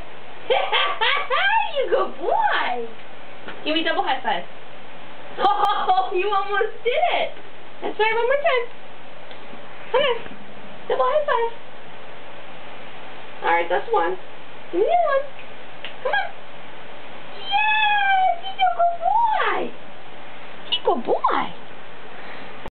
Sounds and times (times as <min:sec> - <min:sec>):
Speech: 0:00.5 - 0:03.0, 0:03.6 - 0:04.5, 0:05.4 - 0:08.7, 0:09.9 - 0:10.3, 0:10.9 - 0:11.6, 0:13.4 - 0:15.3, 0:17.4 - 0:19.8, 0:20.7 - 0:21.6.